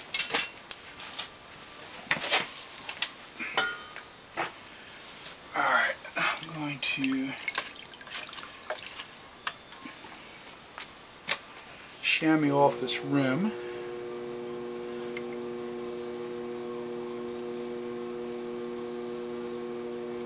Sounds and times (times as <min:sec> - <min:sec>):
Speech: 0:05.6 - 0:07.4, 0:12.0 - 0:13.6.